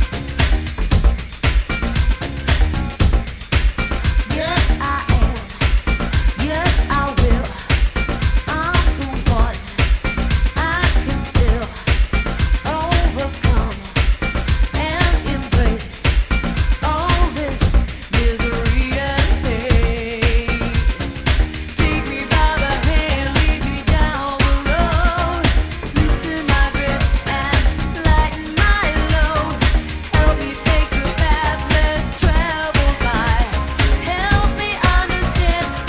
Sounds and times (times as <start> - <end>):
Music: 0.0 - 35.8.